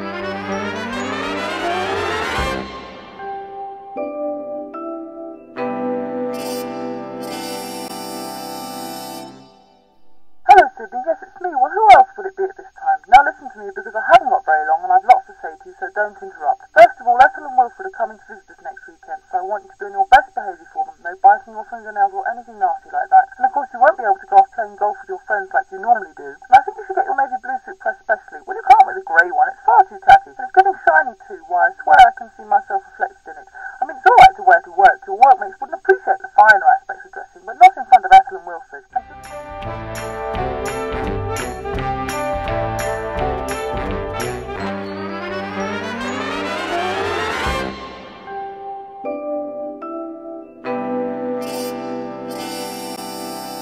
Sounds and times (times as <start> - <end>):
Music: 0.0 - 10.4, 39.0 - 53.6.